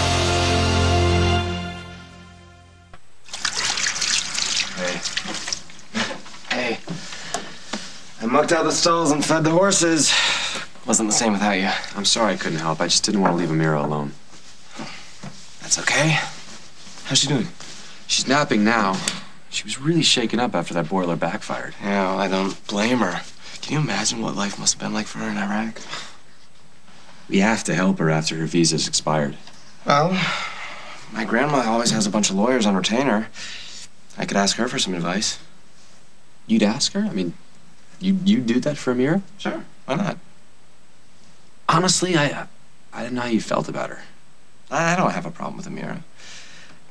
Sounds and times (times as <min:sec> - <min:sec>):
Water: 0:03.2 - 0:05.9.